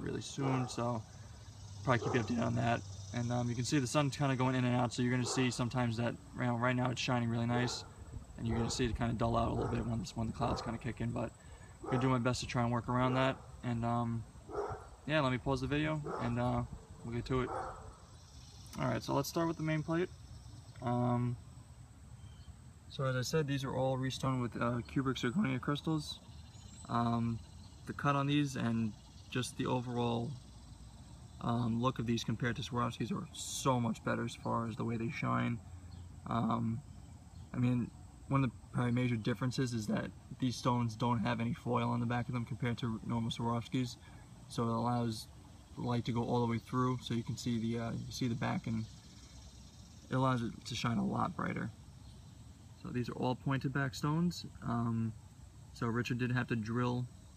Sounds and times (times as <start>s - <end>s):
Speech: 0.0s - 1.1s, 1.8s - 14.3s, 15.1s - 17.6s, 18.8s - 20.1s, 20.8s - 21.4s, 22.9s - 26.2s, 26.8s - 30.4s, 31.4s - 35.6s, 36.2s - 36.8s, 37.5s - 48.9s, 50.1s - 51.8s, 52.8s - 55.2s, 55.8s - 57.1s.